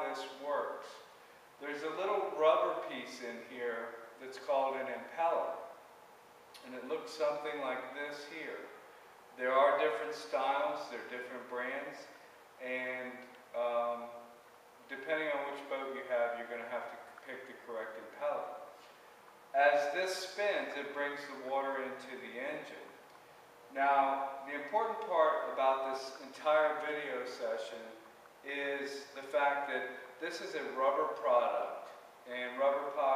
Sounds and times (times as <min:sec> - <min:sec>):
Speech: 0:00.0 - 0:05.7, 0:06.6 - 0:08.8, 0:09.4 - 0:14.2, 0:14.9 - 0:18.7, 0:19.6 - 0:23.0, 0:23.8 - 0:33.1.